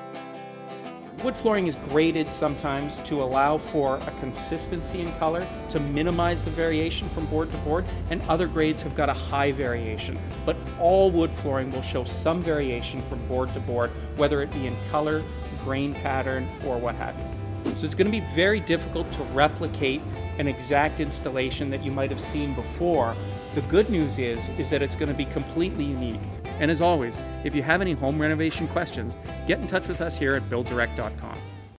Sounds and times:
Music: 0.0s - 31.7s
Speech: 1.2s - 31.4s.

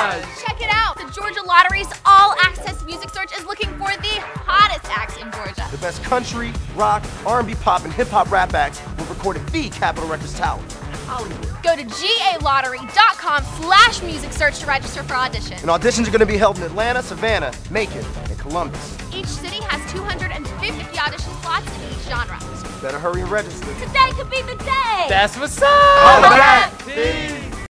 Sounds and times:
Dance music: 0.0s - 16.8s, 18.5s - 27.7s
Soundtrack music: 0.0s - 27.7s
Theme music: 0.0s - 27.7s.

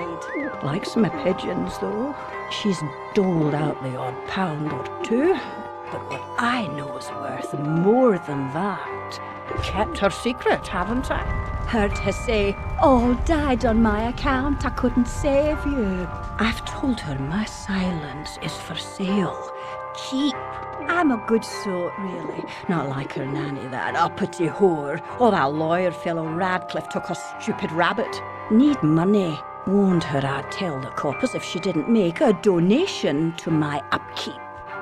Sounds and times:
Speech: 0.0s - 34.4s
Music: 0.0s - 34.8s.

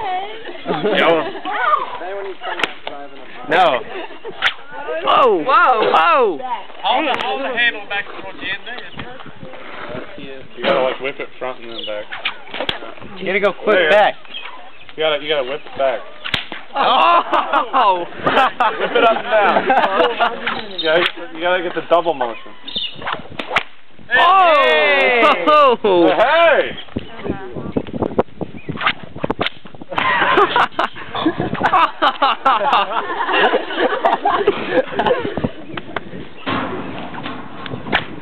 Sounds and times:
Whip: 4.4s - 4.6s, 16.2s - 16.7s, 21.0s - 21.2s, 23.0s - 23.8s, 28.8s - 29.7s, 37.9s - 38.2s.

